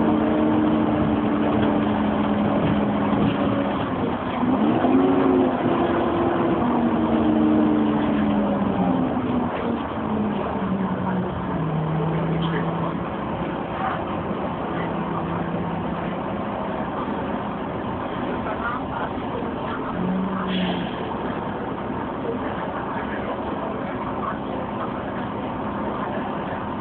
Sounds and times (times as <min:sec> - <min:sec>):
Bus: 0:00.0 - 0:26.8.